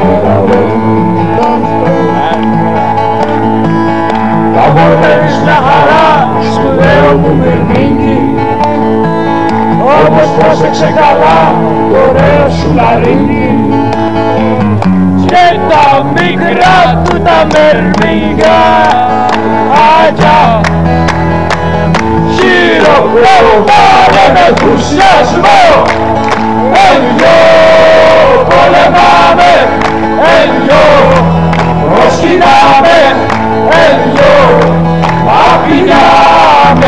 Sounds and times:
Inside, large room or hall: 0:00.0 - 0:36.8
Music: 0:00.0 - 0:36.8
Singing: 0:04.6 - 0:08.6, 0:09.8 - 0:13.9, 0:15.2 - 0:20.7, 0:22.3 - 0:26.0, 0:26.6 - 0:36.8.

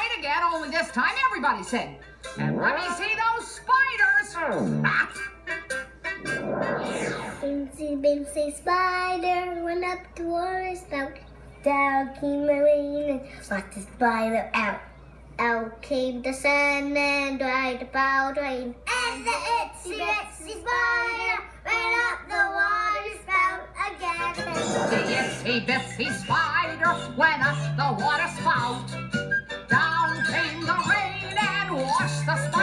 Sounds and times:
Music: 0:00.0 - 0:12.1, 0:21.7 - 0:32.6.

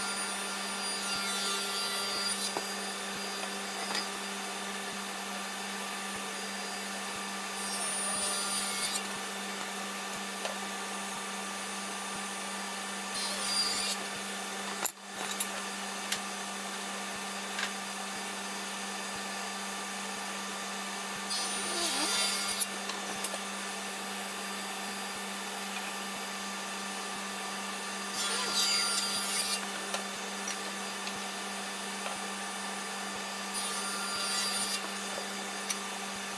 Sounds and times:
Sawing: 0:00.0 - 0:36.3.

